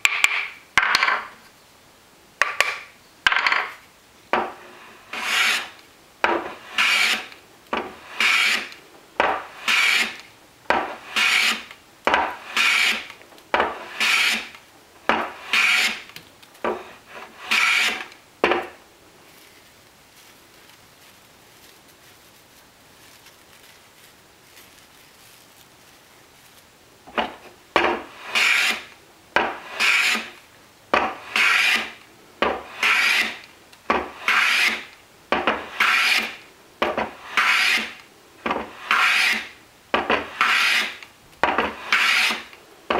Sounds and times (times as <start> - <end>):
Wood: 0.0 - 1.4, 2.4 - 18.8, 27.1 - 42.9
Filing (rasp): 5.0 - 5.8, 6.4 - 13.1, 13.7 - 14.6, 15.2 - 16.1, 16.7 - 18.1, 27.9 - 30.4, 31.0 - 34.9, 35.5 - 42.6.